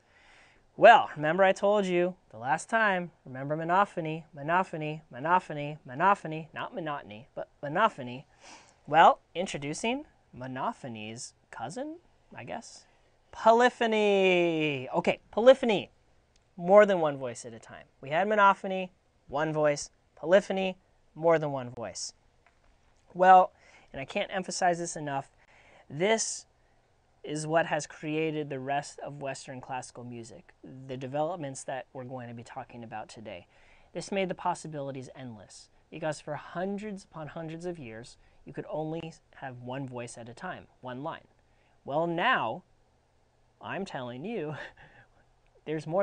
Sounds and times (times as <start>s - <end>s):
Speech: 0.8s - 8.3s, 8.9s - 15.9s, 16.6s - 22.2s, 23.1s - 26.5s, 27.2s - 42.7s, 43.6s - 44.8s, 45.6s - 46.0s.